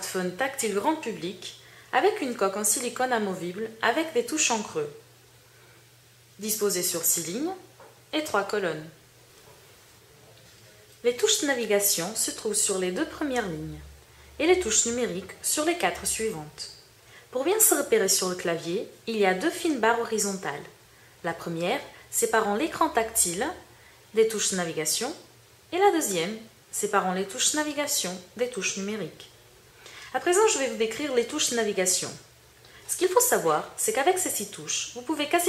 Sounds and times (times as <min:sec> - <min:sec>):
Speech: 0:00.0 - 0:05.0, 0:06.4 - 0:09.0, 0:10.0 - 0:29.4, 0:30.1 - 0:32.3, 0:32.9 - 0:35.4.